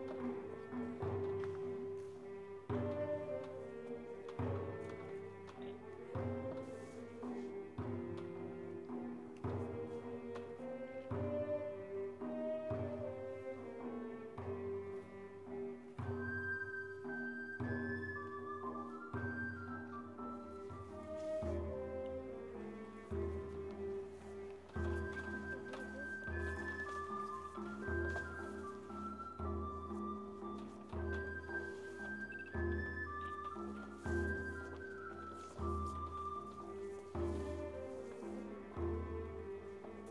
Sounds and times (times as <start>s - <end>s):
Music: 0.0s - 40.1s.